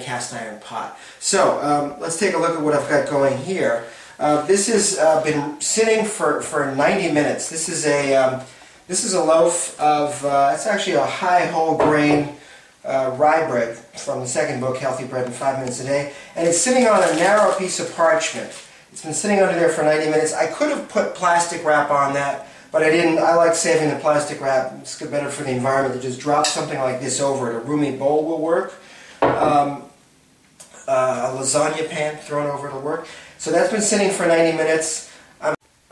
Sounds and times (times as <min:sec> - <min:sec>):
Speech: 0:00.0 - 0:30.0, 0:30.6 - 0:35.6.